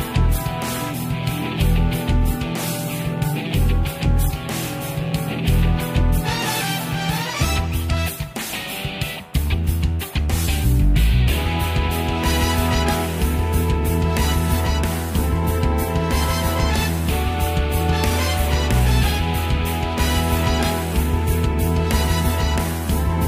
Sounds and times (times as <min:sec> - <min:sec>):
Music: 0:00.0 - 0:23.2.